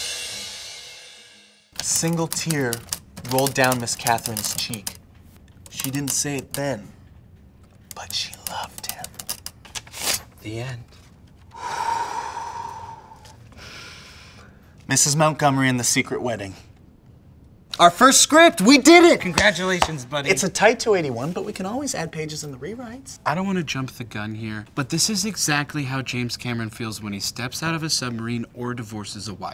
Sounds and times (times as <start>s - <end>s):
Inside, small room: 0.0s - 29.5s.